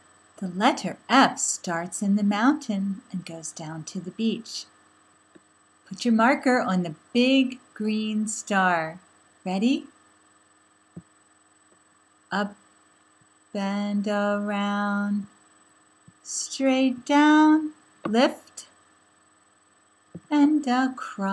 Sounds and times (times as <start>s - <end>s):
Speech: 0.4s - 4.7s, 5.9s - 9.9s, 12.3s - 12.6s, 13.6s - 15.3s, 16.3s - 18.7s, 20.3s - 21.3s.